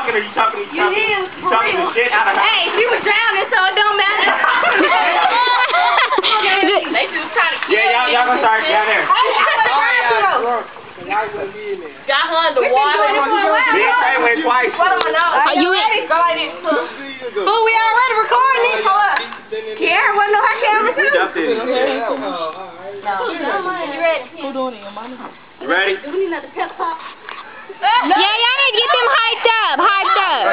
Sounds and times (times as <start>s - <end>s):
Stream: 0.0s - 30.5s.